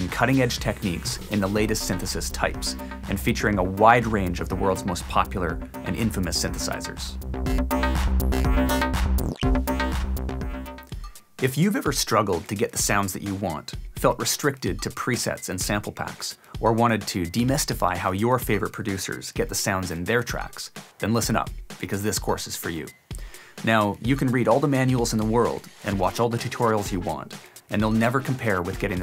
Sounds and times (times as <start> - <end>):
Speech: 0.0 - 7.2, 11.4 - 23.0, 23.6 - 29.0
Music: 0.0 - 29.0.